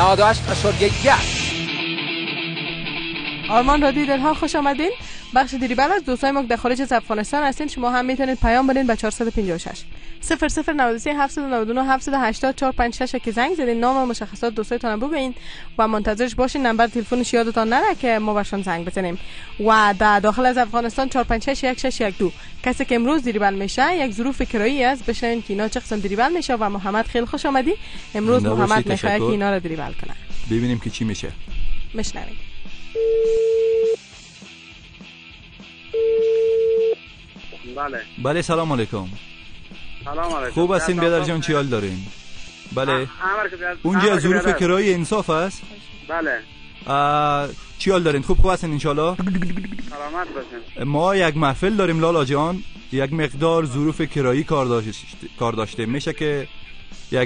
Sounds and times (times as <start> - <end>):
Speech: 0.0 - 1.3, 3.5 - 8.6, 19.6 - 31.4, 37.7 - 39.2, 40.0 - 42.1, 42.7 - 49.2, 49.9 - 56.5
Music: 0.0 - 57.2.